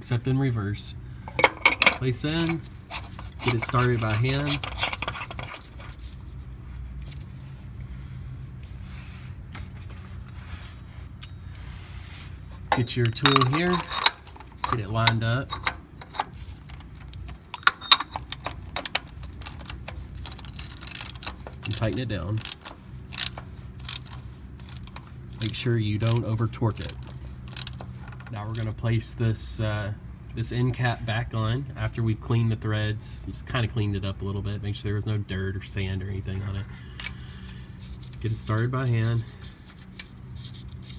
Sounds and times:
Speech: 0.0 - 1.0, 2.0 - 2.6, 3.4 - 4.6, 12.7 - 13.9, 21.7 - 22.4, 25.4 - 27.0, 28.3 - 36.7, 38.2 - 39.3.

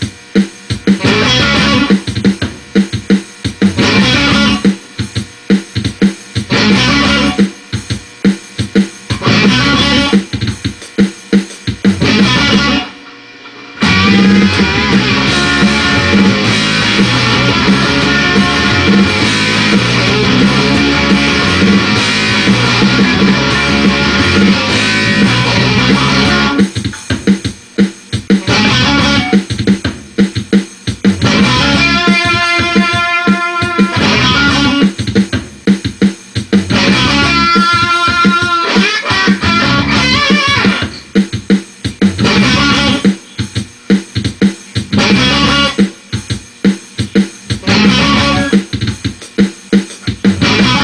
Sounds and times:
Music: 0.0 - 50.8.

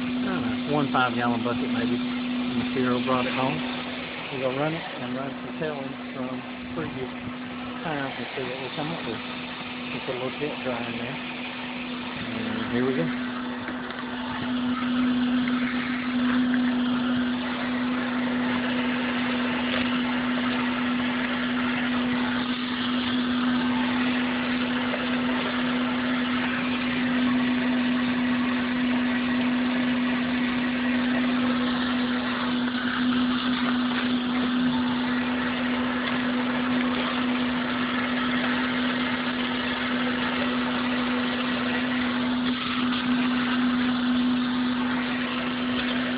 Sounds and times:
Speech: 0.2 - 3.6, 4.3 - 7.1, 7.8 - 9.2, 10.0 - 11.2, 12.2 - 13.2.

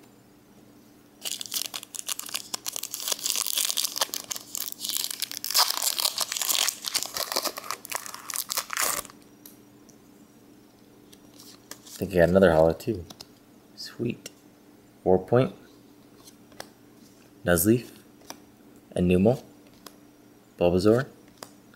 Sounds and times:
Crumpling, crinkling: 1.2 - 9.2
Speech: 12.0 - 13.1, 13.8 - 14.4, 15.0 - 15.6, 17.4 - 18.0, 18.9 - 19.5, 20.6 - 21.2.

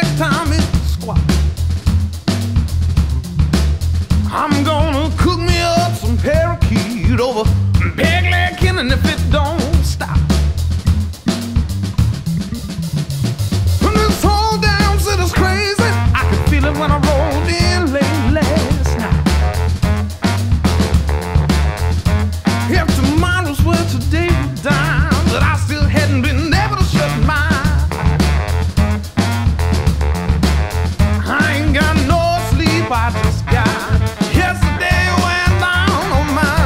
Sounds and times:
Funk: 0.0 - 36.6
Exciting music: 9.4 - 23.5, 26.6 - 36.6.

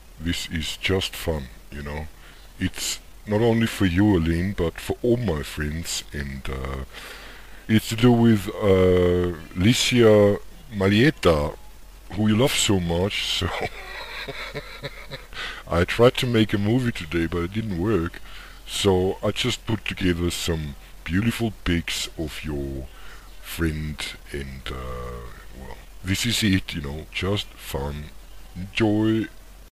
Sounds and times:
Speech: 0.2 - 6.9, 7.7 - 13.9, 15.7 - 29.4.

